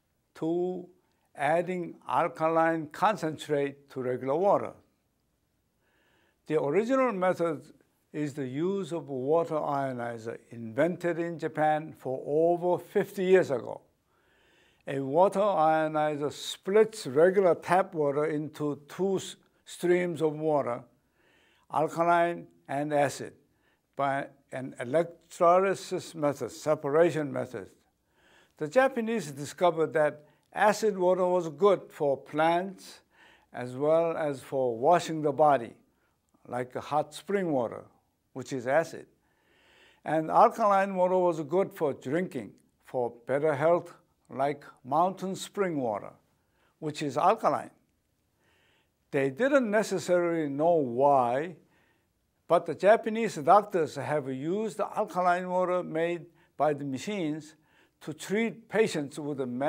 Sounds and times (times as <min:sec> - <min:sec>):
Speech: 0:00.4 - 0:04.8, 0:06.5 - 0:13.9, 0:14.9 - 0:20.9, 0:21.7 - 0:23.4, 0:24.0 - 0:27.8, 0:28.6 - 0:33.0, 0:33.6 - 0:35.8, 0:36.4 - 0:39.1, 0:40.0 - 0:46.2, 0:46.8 - 0:47.8, 0:49.1 - 0:51.6, 0:52.5 - 0:59.6.